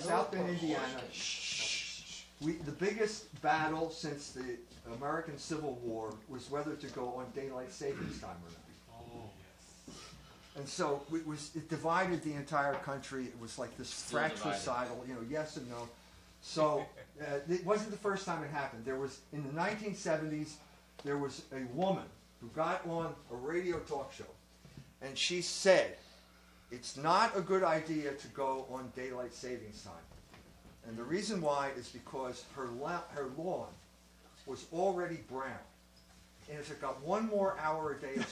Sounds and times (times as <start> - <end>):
Speech: 0.0 - 9.6, 10.6 - 24.4, 25.0 - 26.0, 26.7 - 30.1, 30.8 - 33.8, 34.4 - 35.7, 36.5 - 38.3.